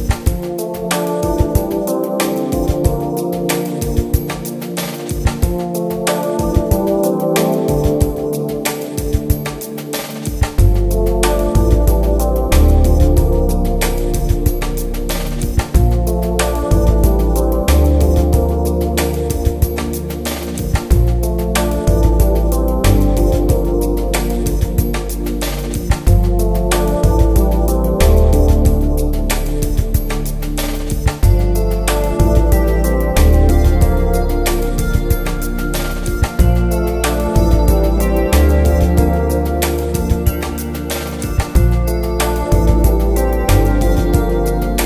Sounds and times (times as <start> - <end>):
Music: 0.0 - 44.8.